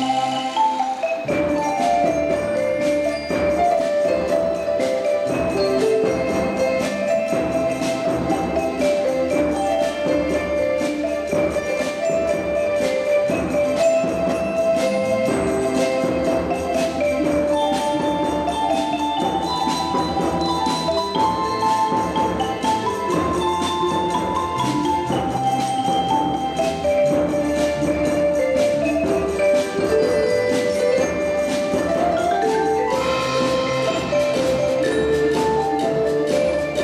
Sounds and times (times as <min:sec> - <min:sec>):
Music: 0:00.0 - 0:36.8.